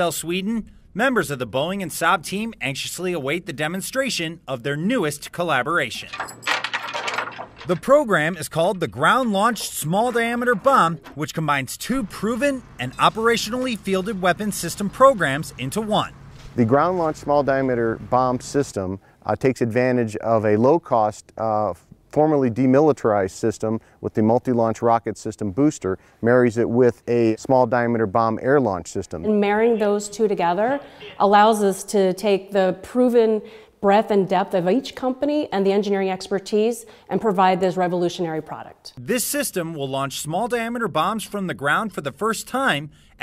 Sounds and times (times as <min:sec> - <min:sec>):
Speech: 0:00.0 - 0:06.2, 0:07.7 - 0:42.9.